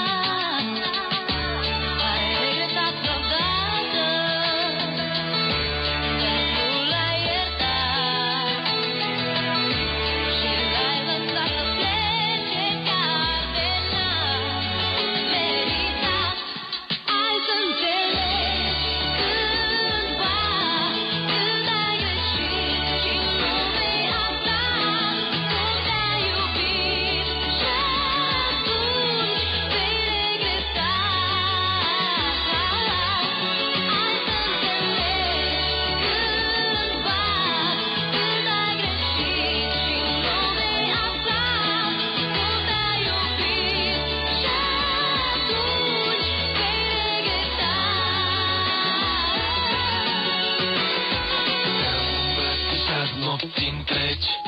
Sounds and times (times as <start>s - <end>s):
Music: 0.0s - 54.4s.